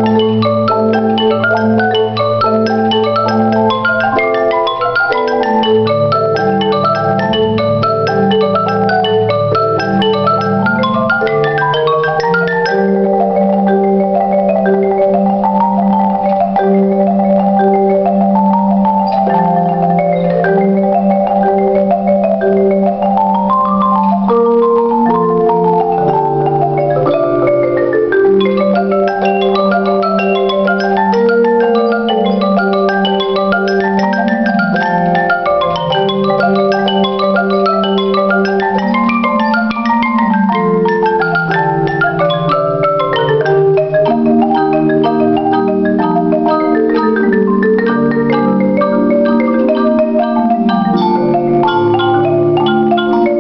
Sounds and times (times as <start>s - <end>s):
Glockenspiel: 0.0s - 53.4s
Marimba, xylophone: 0.0s - 53.4s.